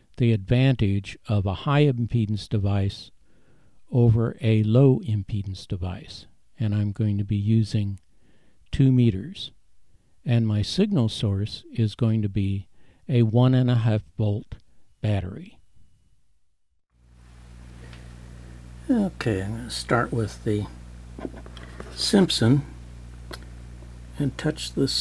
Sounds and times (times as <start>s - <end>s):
Speech: 0.2s - 3.1s, 3.9s - 8.0s, 8.7s - 9.6s, 10.3s - 15.6s, 18.9s - 20.8s, 21.9s - 22.8s, 24.2s - 25.0s.